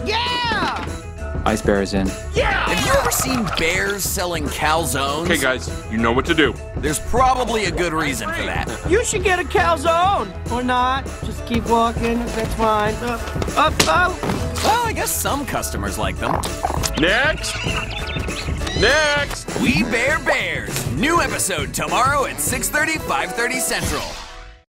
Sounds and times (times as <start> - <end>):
Music: 0.0 - 24.6
Speech: 18.8 - 24.1.